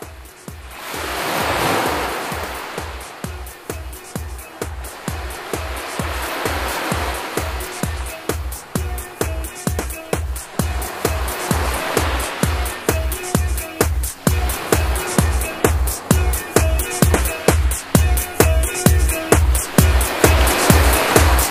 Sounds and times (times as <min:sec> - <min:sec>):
Exciting music: 0:00.1 - 0:21.5.